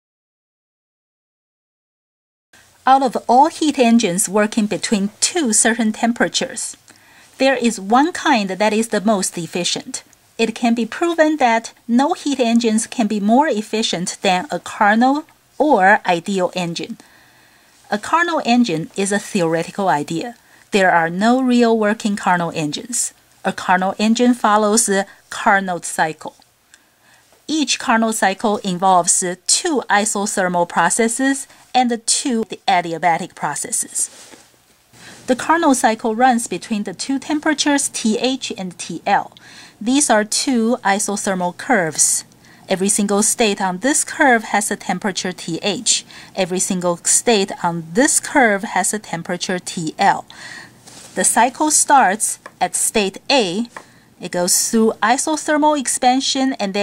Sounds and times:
Speech: 2.8s - 6.8s, 7.4s - 17.0s, 17.9s - 26.4s, 27.5s - 34.1s, 35.3s - 50.3s, 51.2s - 56.8s.

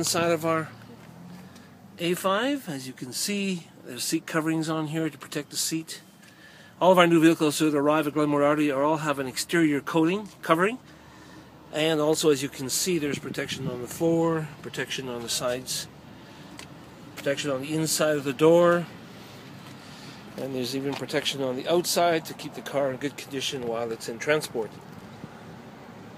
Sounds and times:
Speech: 0.0s - 0.8s, 2.0s - 6.0s, 6.8s - 10.8s, 11.7s - 16.0s, 17.2s - 18.9s, 20.4s - 24.8s.

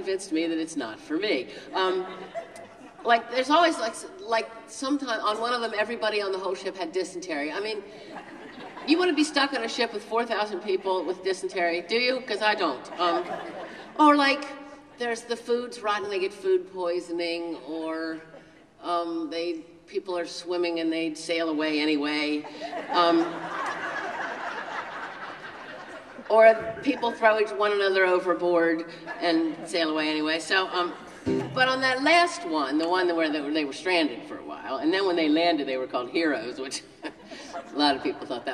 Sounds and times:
Speech: 0.0s - 2.2s, 3.0s - 7.9s, 8.9s - 13.4s, 14.0s - 23.4s, 26.3s - 36.9s, 37.6s - 38.5s.

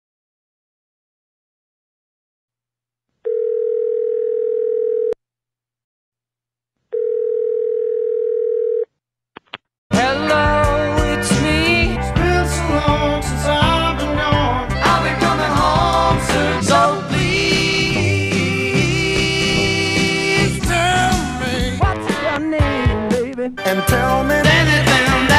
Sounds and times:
Dial tone: 3.3s - 5.2s, 6.9s - 8.9s.

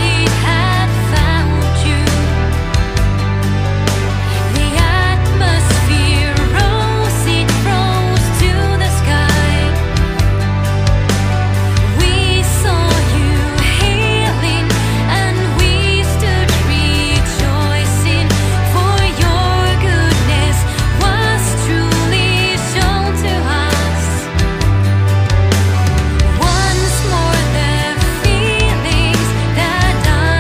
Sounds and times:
Music: 0.0s - 30.4s.

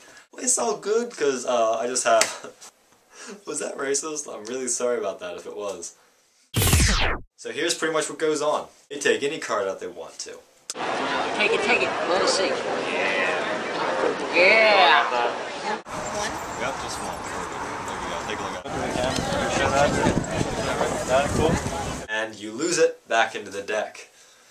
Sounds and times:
Speech: 0.4s - 2.6s, 3.4s - 6.0s, 7.4s - 10.4s, 16.6s - 24.1s.

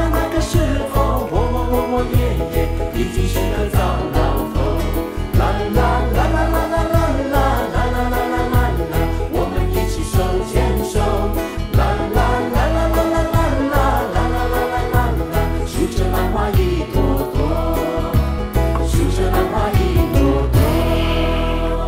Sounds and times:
Music: 0.0s - 21.8s
Singing: 0.0s - 21.8s.

